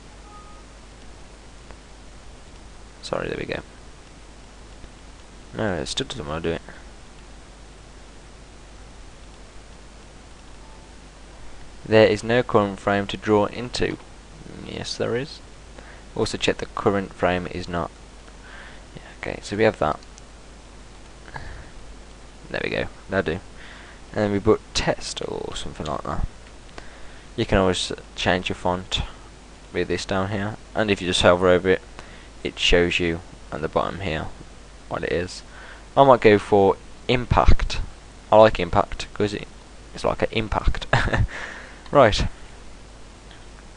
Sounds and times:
Speech: 3.0s - 3.7s, 5.6s - 6.6s, 11.9s - 15.4s, 16.2s - 17.9s, 19.0s - 20.0s, 22.5s - 23.4s, 24.2s - 26.3s, 27.4s - 29.2s, 29.8s - 31.8s, 32.4s - 40.9s, 41.9s - 42.4s.

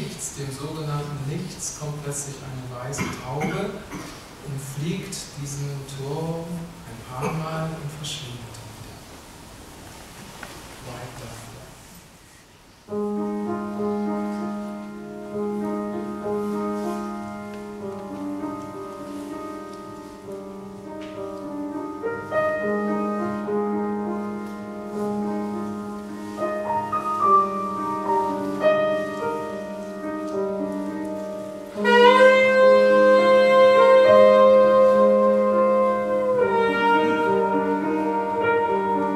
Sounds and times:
Speech: 0.0s - 3.8s, 4.5s - 8.7s, 10.8s - 11.9s
Music: 12.9s - 39.1s.

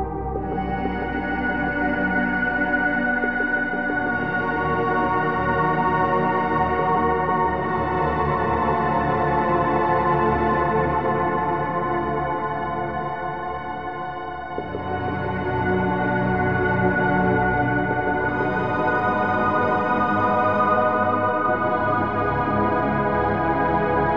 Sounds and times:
Music: 0.0s - 24.1s.

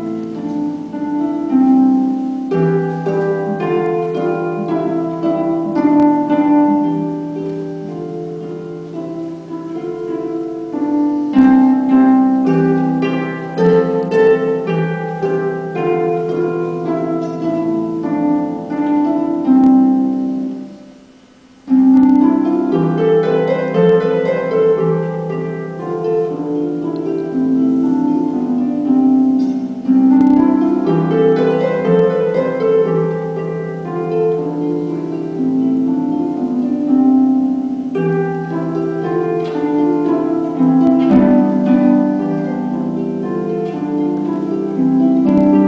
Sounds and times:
Harp: 0.0s - 45.6s.

